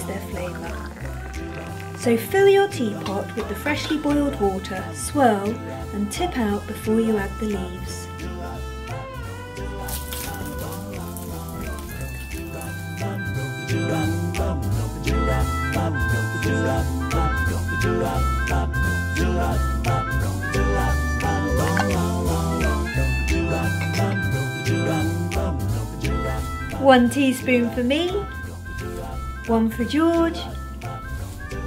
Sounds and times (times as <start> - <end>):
Jingle (music): 0.0 - 31.6.